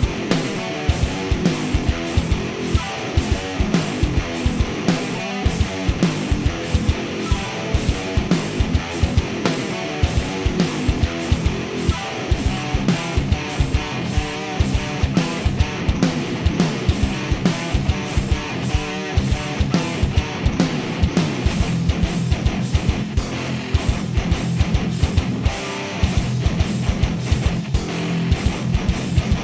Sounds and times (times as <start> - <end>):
Strum: 0.0 - 29.4.